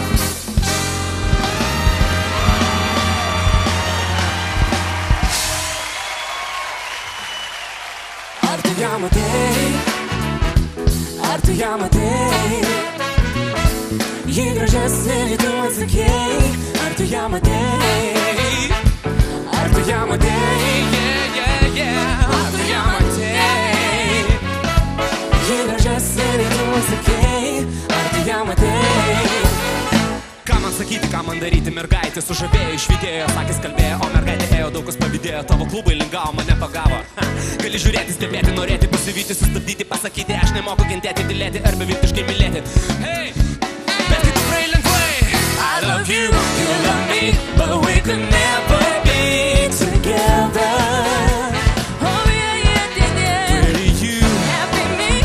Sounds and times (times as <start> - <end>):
Soundtrack music: 0.0 - 6.2, 7.8 - 55.2.